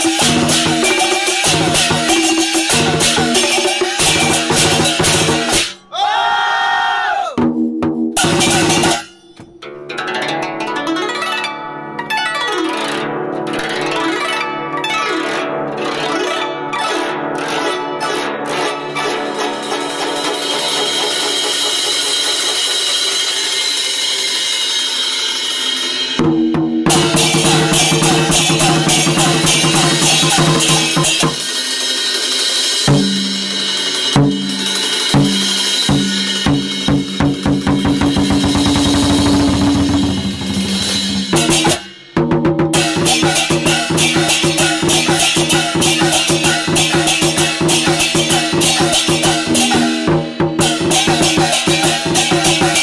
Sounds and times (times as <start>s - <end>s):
Percussion: 0.0s - 6.0s, 7.3s - 52.8s.